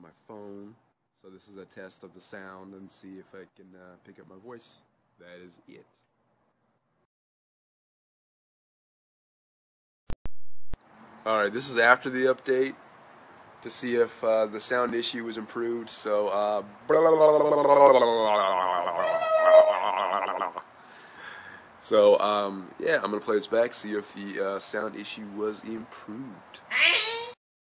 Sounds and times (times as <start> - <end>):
Speech: 0.0 - 6.0, 11.3 - 12.8, 13.6 - 18.2, 21.8 - 27.3.